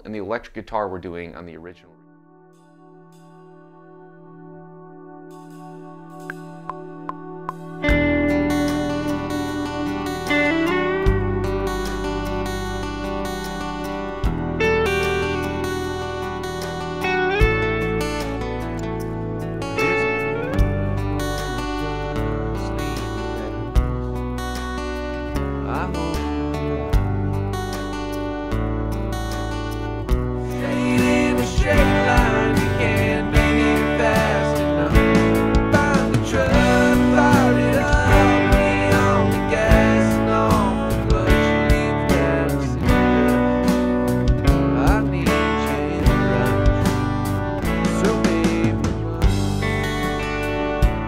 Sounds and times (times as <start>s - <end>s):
Acoustic guitar: 2.5s - 51.0s
Strum: 6.2s - 51.0s.